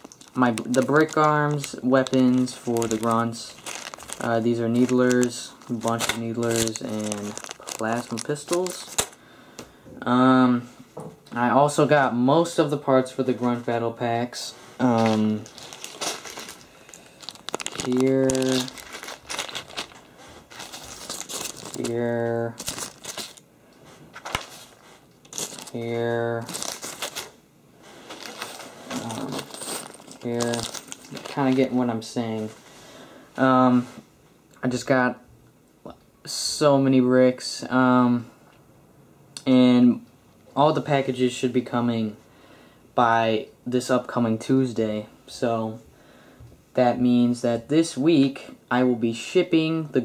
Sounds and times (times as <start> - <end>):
Crumpling, crinkling: 0.0 - 9.2, 14.8 - 23.4, 24.1 - 27.4, 28.0 - 31.9
Speech: 0.4 - 3.6, 4.2 - 8.9, 11.3 - 15.5, 21.8 - 22.6, 30.2 - 32.6, 33.4 - 34.0, 34.6 - 35.3, 35.9 - 38.3, 39.4 - 42.2, 43.0 - 45.8, 46.7 - 50.0.